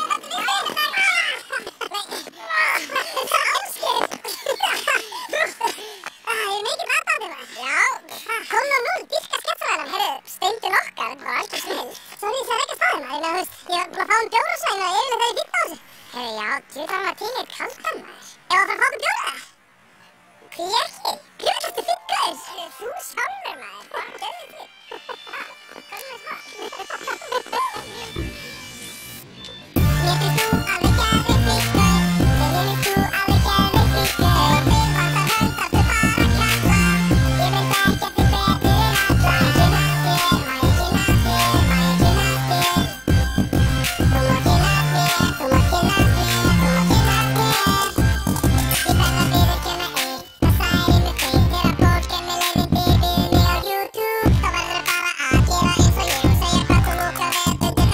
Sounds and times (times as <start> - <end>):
Music: 25.5 - 57.9.